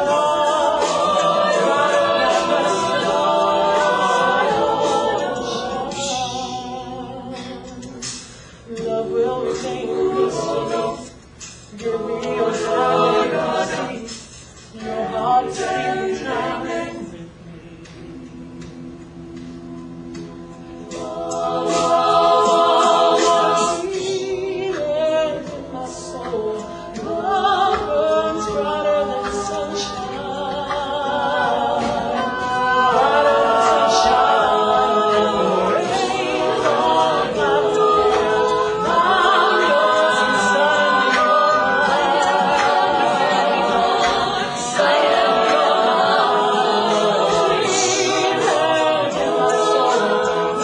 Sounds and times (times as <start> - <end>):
A capella: 0.0 - 50.6
Choir: 0.0 - 50.6.